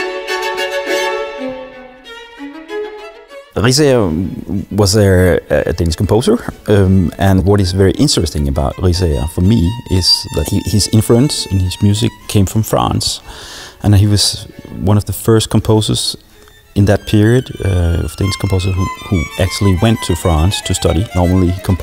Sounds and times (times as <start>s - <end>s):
Violin, fiddle: 0.0s - 4.9s, 5.9s - 21.8s
Speech: 3.6s - 13.2s, 13.8s - 16.2s, 16.8s - 21.8s.